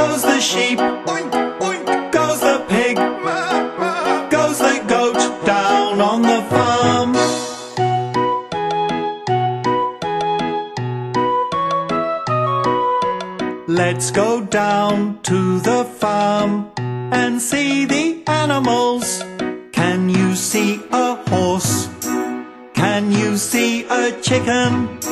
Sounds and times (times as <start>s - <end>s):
Music for children: 0.0s - 25.1s.